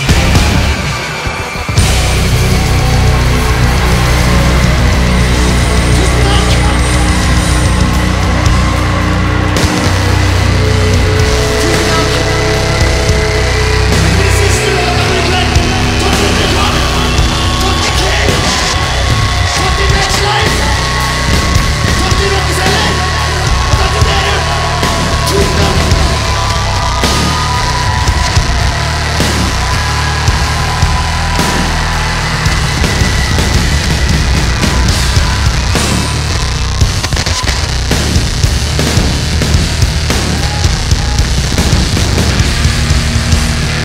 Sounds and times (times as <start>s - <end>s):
Heavy metal: 0.0s - 43.8s
Inside, public space: 0.0s - 43.8s.